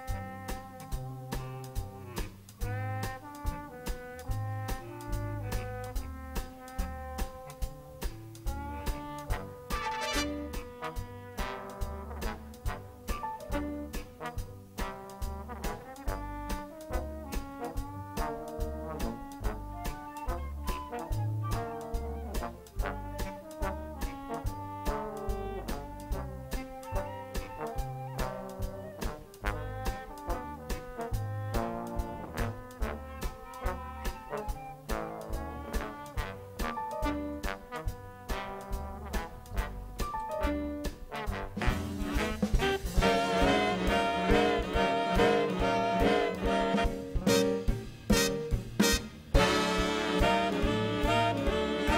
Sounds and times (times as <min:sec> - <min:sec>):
Orchestra: 0:00.0 - 0:51.9.